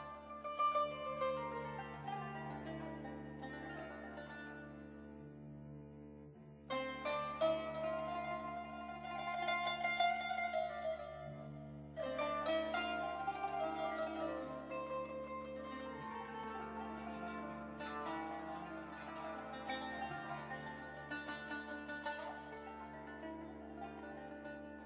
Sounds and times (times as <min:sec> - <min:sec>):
Music: 0:00.0 - 0:24.8.